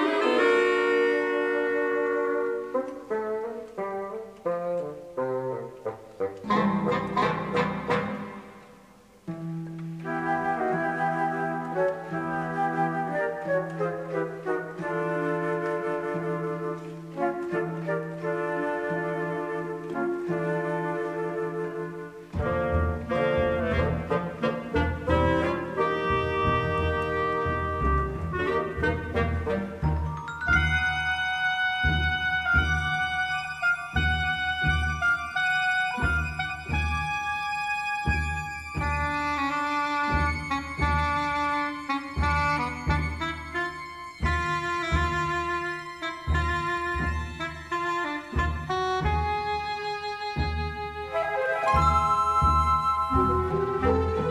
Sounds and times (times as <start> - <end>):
Music: 0.0 - 54.3.